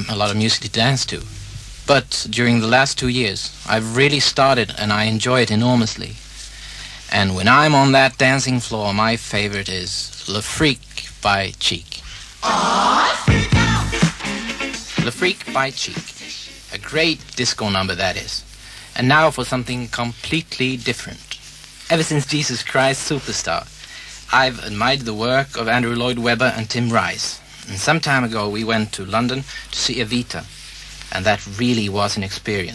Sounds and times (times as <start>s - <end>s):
Speech: 0.0s - 6.2s, 7.0s - 12.1s, 15.0s - 23.7s, 24.3s - 32.7s
Music: 12.5s - 16.8s.